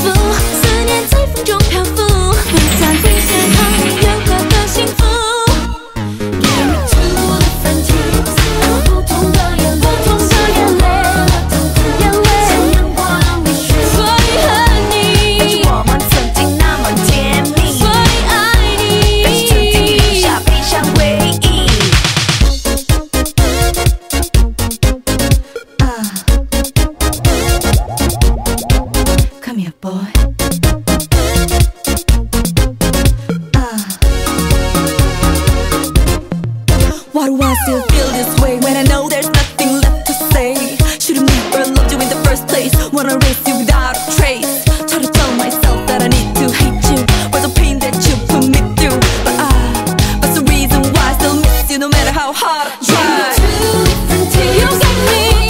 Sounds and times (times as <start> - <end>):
Afrobeat: 26.5 - 29.4.